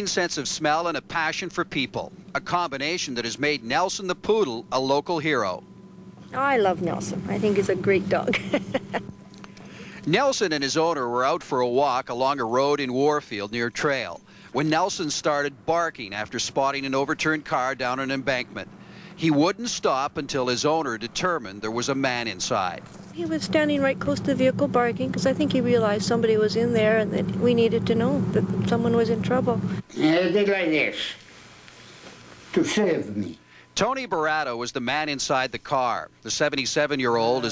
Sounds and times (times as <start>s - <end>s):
Speech: 0.0s - 5.6s, 10.1s - 31.2s, 32.6s - 37.5s.